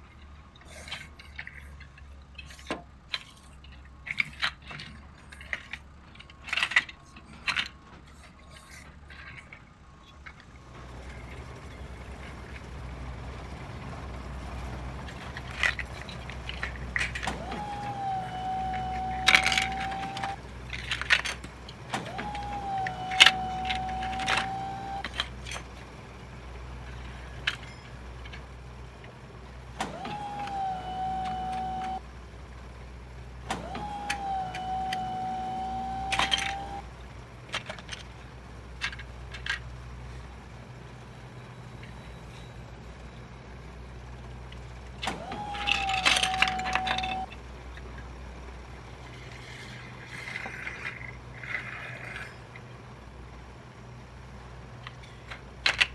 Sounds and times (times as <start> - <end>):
Truck: 0.0 - 55.9.